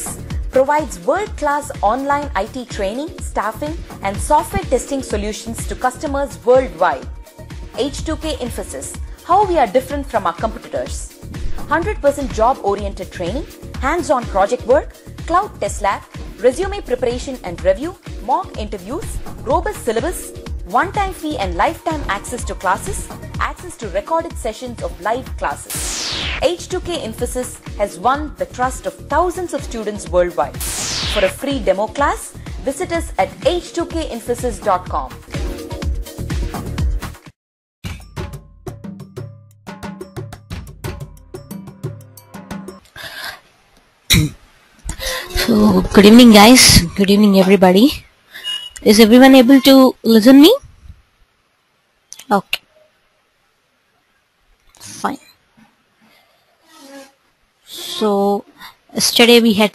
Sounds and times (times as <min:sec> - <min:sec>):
Music: 0:00.0 - 0:43.2, 0:44.9 - 0:46.8
Speech: 0:00.6 - 0:07.1, 0:07.8 - 0:11.1, 0:11.7 - 0:25.6, 0:26.4 - 0:30.6, 0:31.2 - 0:35.2, 0:45.4 - 0:48.0, 0:48.8 - 0:50.7, 0:57.8 - 0:59.7.